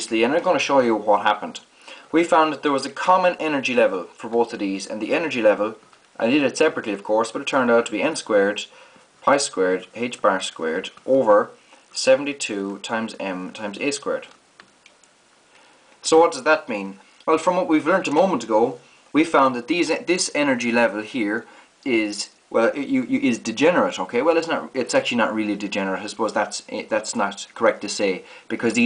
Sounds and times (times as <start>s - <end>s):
Speech: 0.0s - 14.4s, 16.0s - 28.8s
Inside, small room: 0.0s - 28.8s.